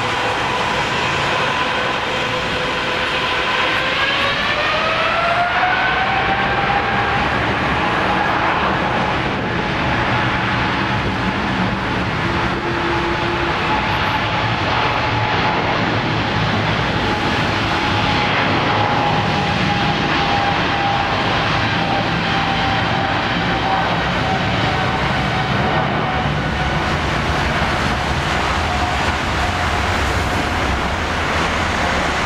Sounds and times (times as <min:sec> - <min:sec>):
Aircraft: 0:00.0 - 0:32.2
Engine: 0:00.0 - 0:32.2.